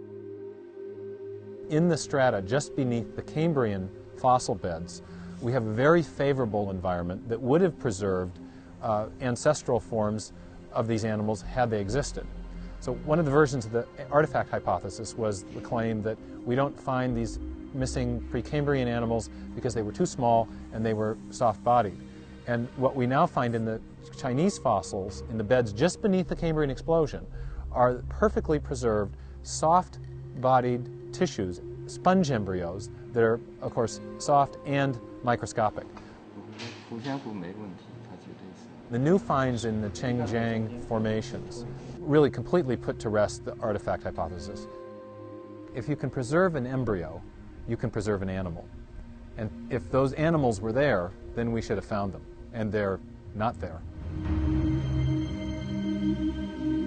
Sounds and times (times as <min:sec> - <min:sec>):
Music: 0:00.0 - 0:56.8
Speech: 0:01.7 - 0:35.9, 0:36.9 - 0:44.6, 0:45.8 - 0:48.7, 0:49.4 - 0:53.8.